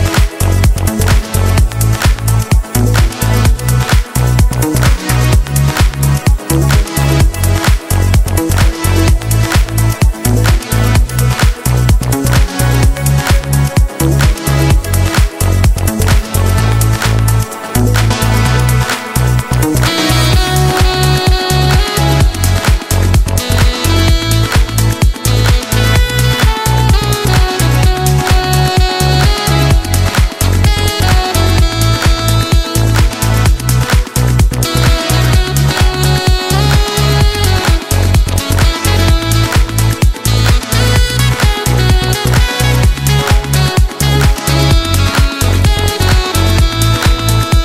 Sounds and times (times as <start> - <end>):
Electronica: 0.0 - 47.6
Soundtrack music: 0.0 - 47.6.